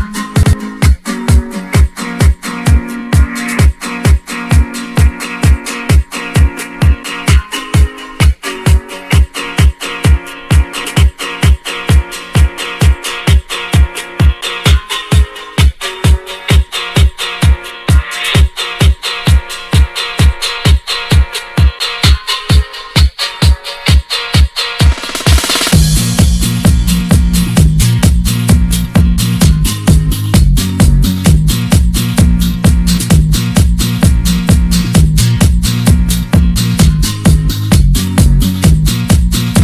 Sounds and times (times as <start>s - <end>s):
Music: 0.0s - 39.6s.